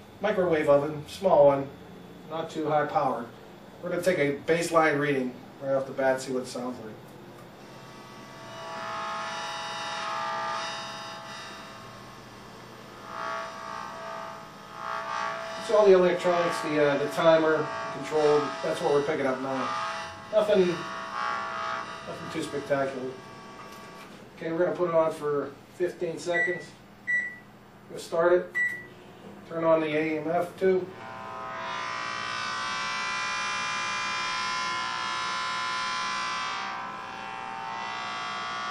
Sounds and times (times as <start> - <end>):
Microwave oven: 0.0 - 24.3, 26.3 - 27.6, 28.6 - 29.3, 30.9 - 38.7
Speech: 0.2 - 7.0, 15.6 - 19.7, 20.3 - 20.8, 22.1 - 23.2, 24.4 - 26.8, 27.9 - 28.5, 29.4 - 30.9.